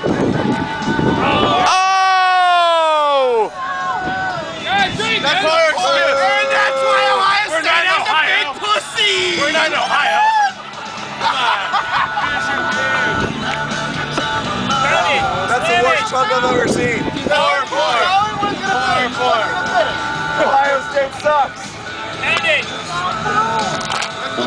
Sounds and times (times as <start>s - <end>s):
Music: 0.0s - 24.4s.